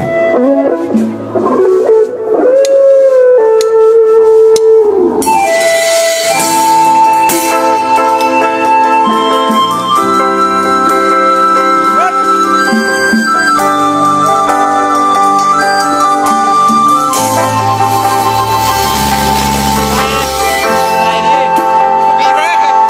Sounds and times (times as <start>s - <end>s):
Independent music: 0.0s - 22.9s.